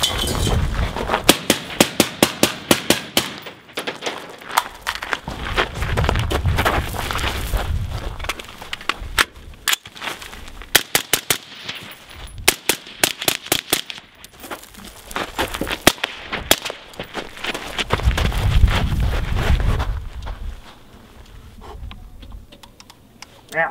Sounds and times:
Outside, rural or natural: 0:00.0 - 0:23.7.

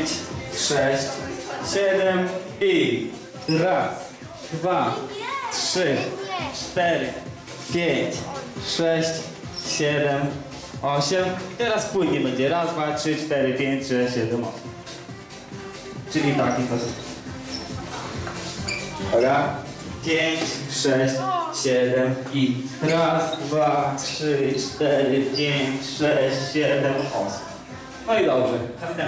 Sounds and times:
Music: 0:00.0 - 0:29.0.

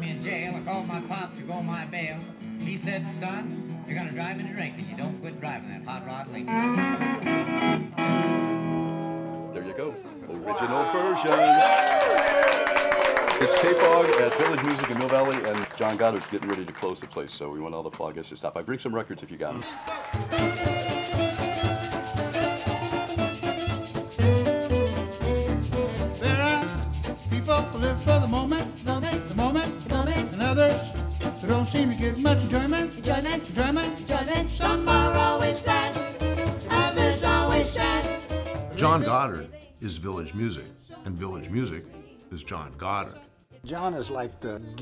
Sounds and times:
Music: 0:00.0 - 0:10.2, 0:13.4 - 0:16.9, 0:19.6 - 0:44.8.

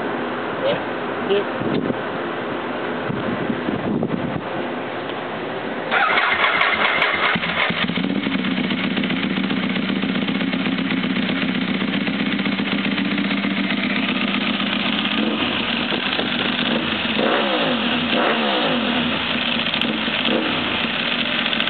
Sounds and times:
Outside, urban or manmade: 0:00.0 - 0:21.6
Motorcycle: 0:05.9 - 0:21.6.

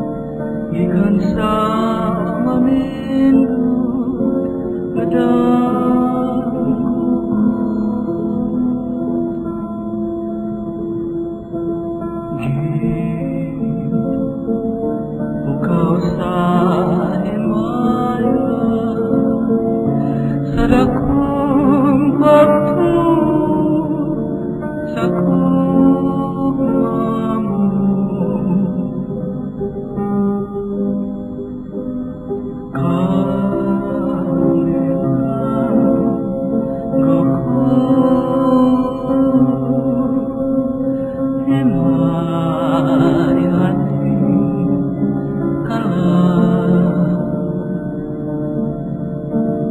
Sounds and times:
Music: 0:00.0 - 0:49.7.

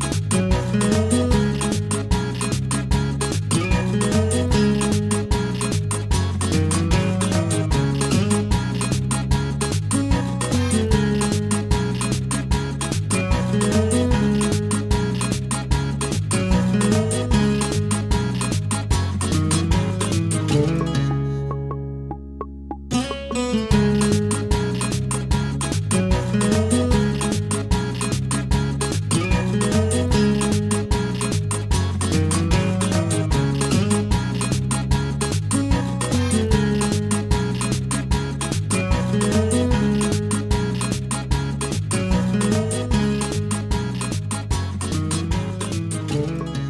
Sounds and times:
Music: 0:00.0 - 0:46.6.

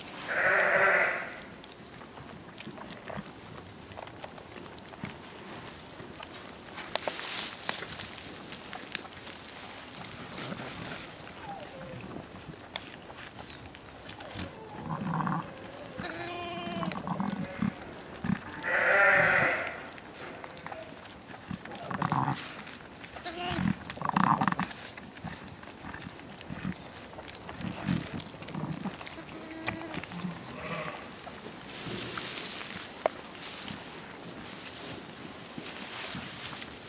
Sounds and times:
Goat: 0:00.0 - 0:36.8
Sheep: 0:00.0 - 0:36.8.

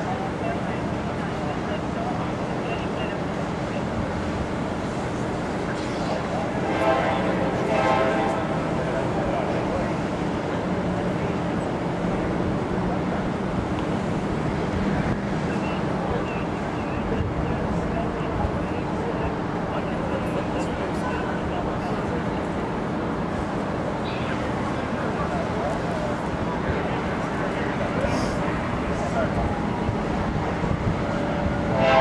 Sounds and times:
Speech: 0:00.0 - 0:14.0, 0:14.6 - 0:30.9
Vehicle: 0:00.0 - 0:32.0.

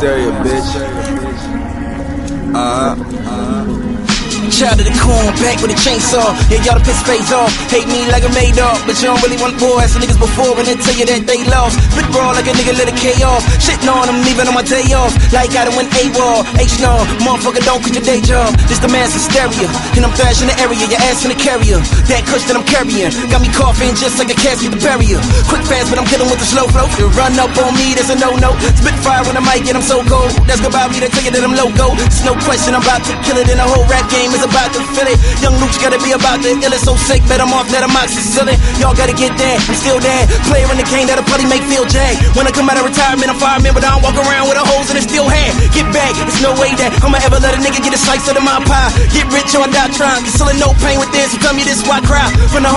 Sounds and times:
Music: 0:00.0 - 0:52.7.

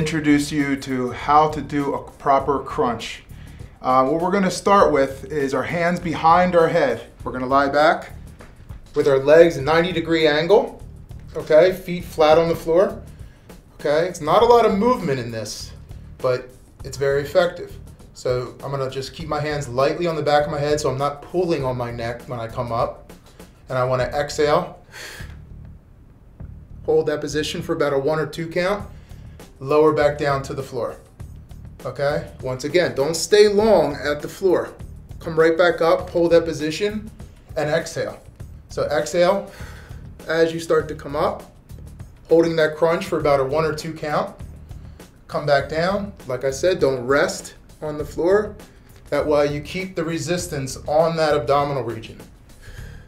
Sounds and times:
Speech: 0:00.0 - 0:08.2, 0:09.0 - 0:13.0, 0:13.8 - 0:23.0, 0:23.7 - 0:24.8, 0:26.9 - 0:28.9, 0:29.6 - 0:31.0, 0:31.8 - 0:39.5, 0:40.2 - 0:41.5, 0:42.3 - 0:44.4, 0:45.3 - 0:52.3
Music: 0:00.0 - 0:53.0.

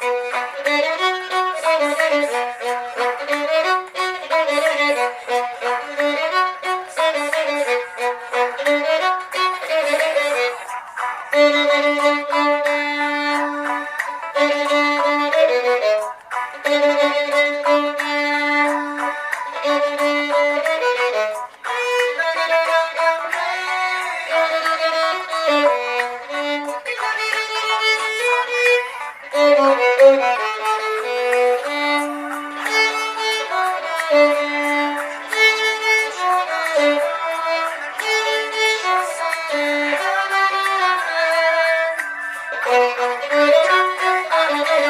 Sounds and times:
Violin, fiddle: 0:00.0 - 0:44.9.

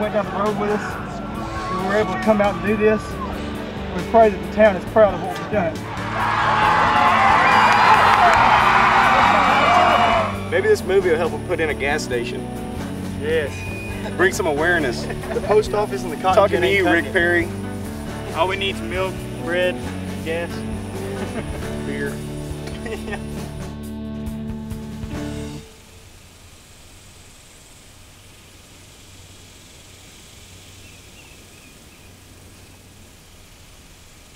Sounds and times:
Music: 0:00.0 - 0:25.8.

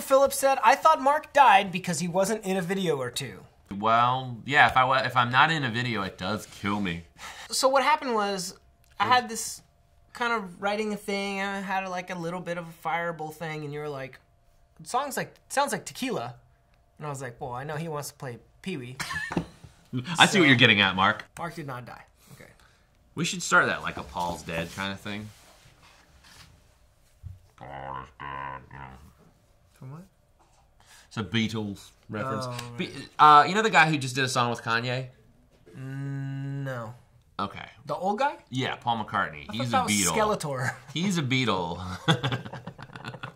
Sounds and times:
Inside, small room: 0:00.0 - 0:43.3.

